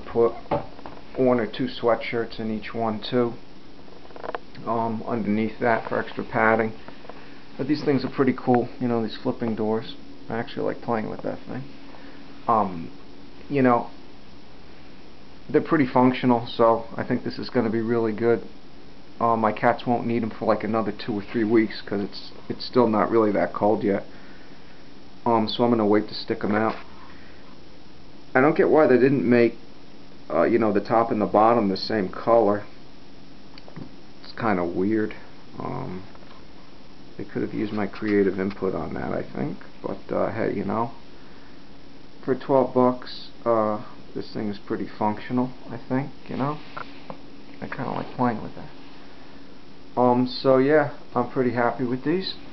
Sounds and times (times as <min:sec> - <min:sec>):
Speech: 0:00.0 - 0:03.4, 0:04.6 - 0:06.8, 0:07.6 - 0:11.8, 0:12.5 - 0:14.0, 0:15.5 - 0:18.6, 0:19.2 - 0:24.1, 0:25.2 - 0:26.9, 0:28.3 - 0:29.6, 0:30.3 - 0:32.8, 0:33.8 - 0:36.2, 0:37.2 - 0:41.0, 0:42.2 - 0:46.8, 0:47.6 - 0:48.8, 0:50.0 - 0:52.5.